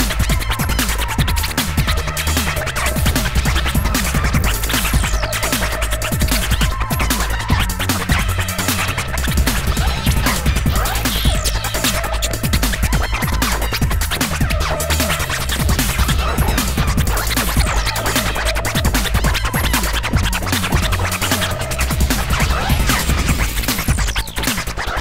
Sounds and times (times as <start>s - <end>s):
Electronic music: 0.0s - 25.0s
Scratching (performance technique): 0.0s - 25.0s.